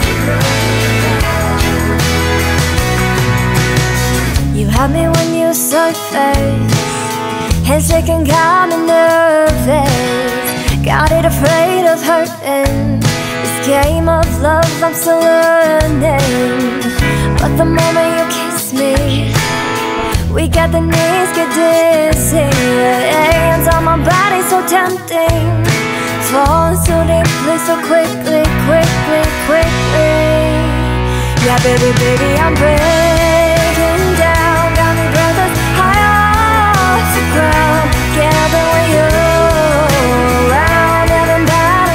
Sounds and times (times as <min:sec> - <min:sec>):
Music: 0:00.0 - 0:41.9.